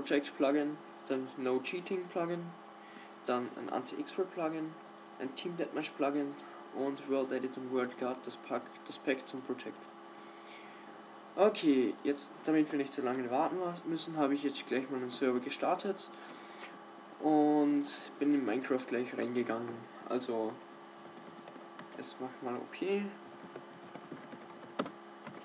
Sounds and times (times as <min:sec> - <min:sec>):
Speech: 0:00.0 - 0:02.6, 0:03.3 - 0:09.8, 0:11.4 - 0:16.1, 0:17.2 - 0:20.6, 0:22.0 - 0:23.2.